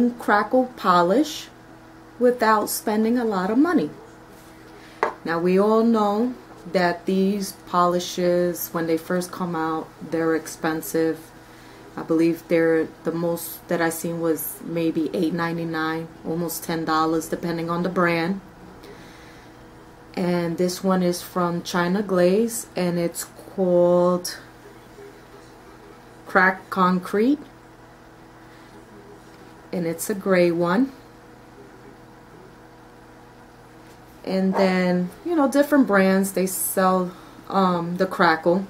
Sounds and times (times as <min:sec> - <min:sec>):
Speech: 0:00.0 - 0:01.6, 0:02.2 - 0:19.0, 0:20.1 - 0:27.6, 0:28.6 - 0:32.7, 0:34.2 - 0:38.6.